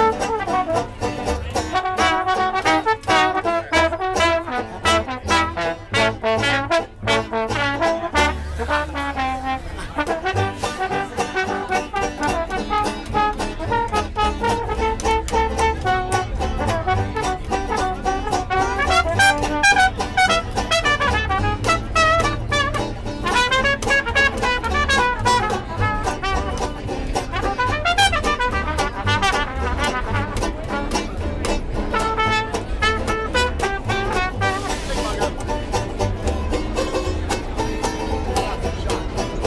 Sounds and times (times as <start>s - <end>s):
Music: 0.0s - 39.4s
Speech: 0.0s - 39.4s.